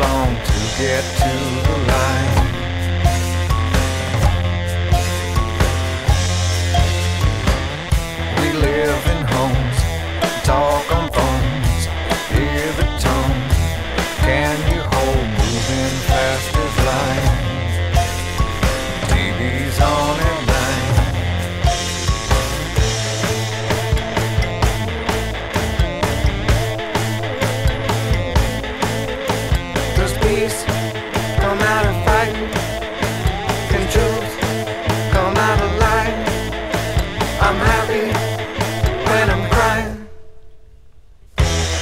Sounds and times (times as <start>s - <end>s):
Music: 0.0s - 41.8s.